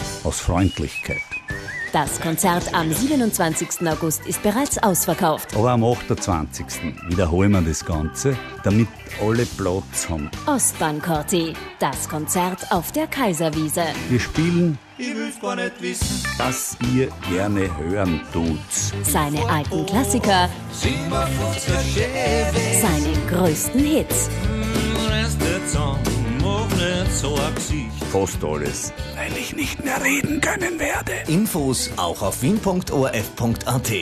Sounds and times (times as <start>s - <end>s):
Music: 0.0s - 34.0s
Speech: 0.2s - 1.2s, 2.0s - 14.8s, 16.4s - 20.5s, 27.8s - 34.0s.